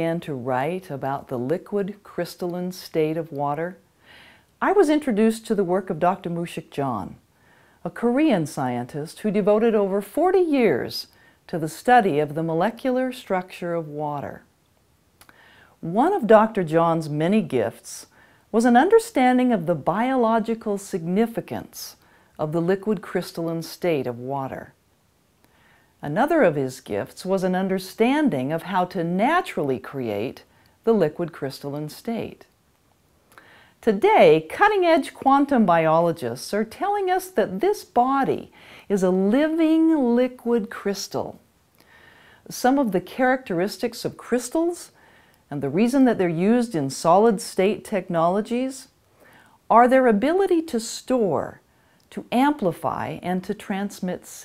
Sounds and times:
Speech: 0.0 - 3.8, 4.6 - 7.2, 7.8 - 14.5, 15.8 - 24.8, 26.0 - 32.5, 33.8 - 41.4, 42.5 - 48.9, 49.7 - 54.4.

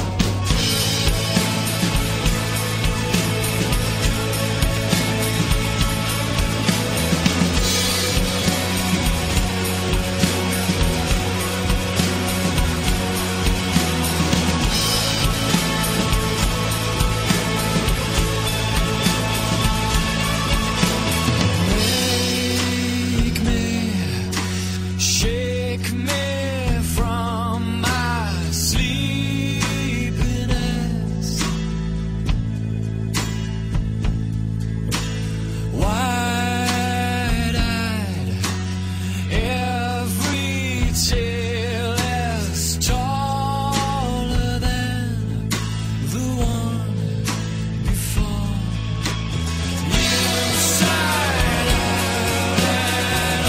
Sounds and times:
Music: 0.0 - 53.4.

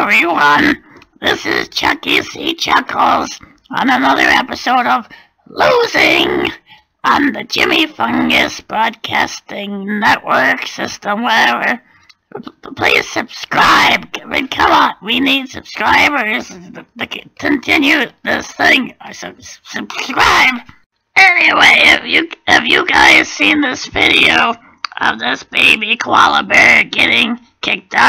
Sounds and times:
Speech: 0.0 - 28.0.

